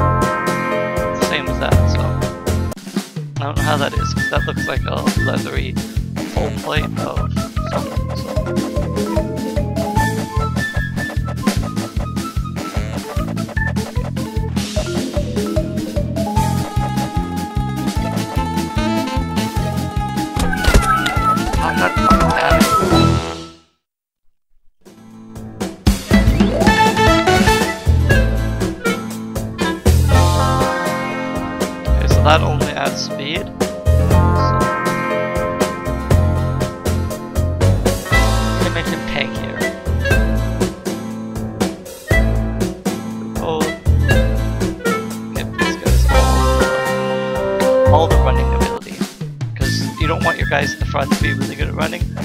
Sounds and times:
Music: 0.0 - 23.8, 24.9 - 52.2
Speech: 1.2 - 2.1, 3.4 - 8.0, 21.6 - 22.8, 32.0 - 33.5, 38.6 - 39.6, 43.4 - 43.8, 45.4 - 46.2, 47.9 - 52.2.

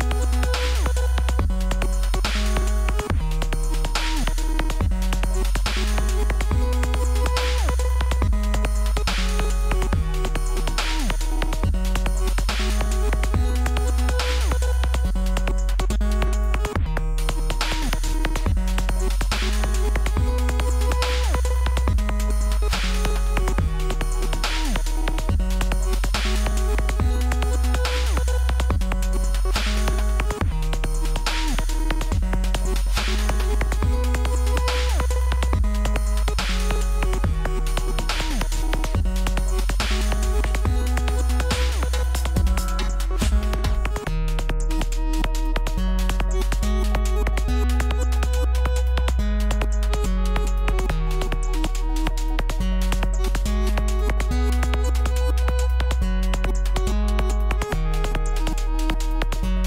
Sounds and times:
Dubstep: 0.0 - 59.6.

